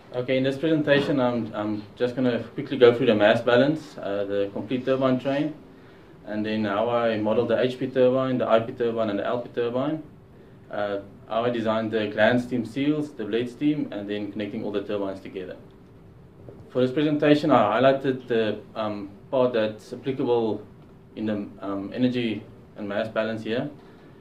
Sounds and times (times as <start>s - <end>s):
Speech: 0.1s - 5.6s, 6.3s - 10.1s, 10.7s - 15.7s, 16.7s - 23.8s.